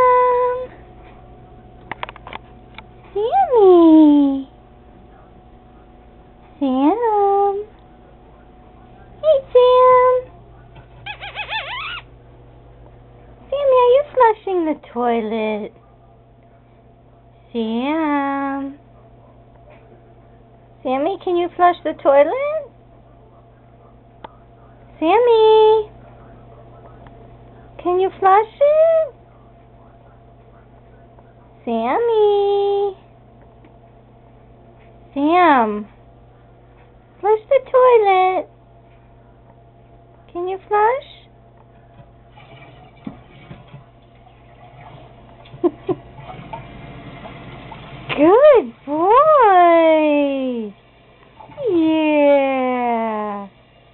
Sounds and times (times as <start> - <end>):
Speech: 0.0 - 1.8, 3.1 - 11.0, 13.2 - 33.1, 35.1 - 36.0, 37.2 - 38.5, 40.1 - 41.4, 48.1 - 50.8, 51.5 - 53.6.